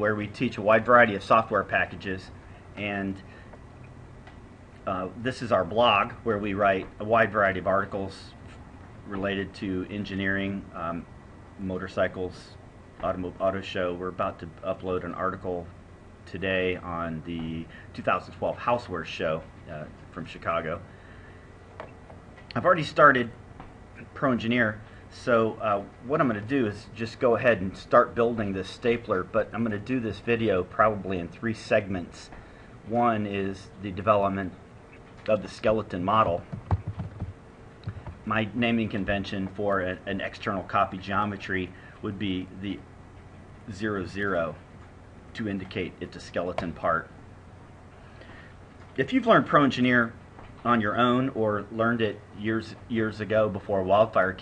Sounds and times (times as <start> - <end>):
Speech: 0.0 - 3.3, 4.8 - 8.5, 9.1 - 20.9, 22.5 - 23.4, 24.0 - 34.6, 35.2 - 36.5, 38.2 - 42.9, 43.6 - 44.6, 45.3 - 47.2, 49.0 - 54.4.